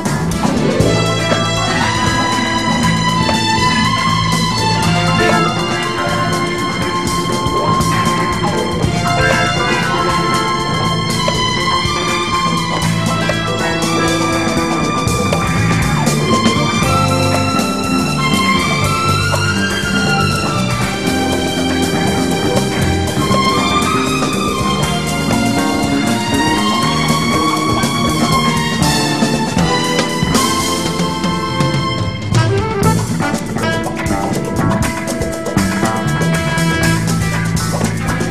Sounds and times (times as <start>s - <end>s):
Jingle (music): 0.5s - 38.3s.